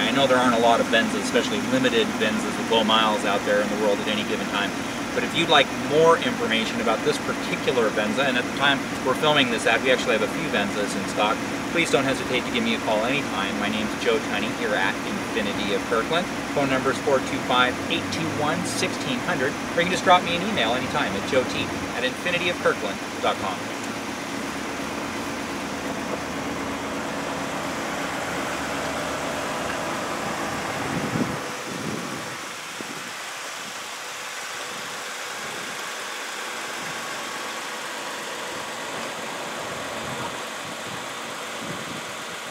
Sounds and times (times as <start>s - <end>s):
Speech: 0.0s - 23.7s
Car: 0.0s - 42.5s
Outside, urban or manmade: 0.0s - 42.5s.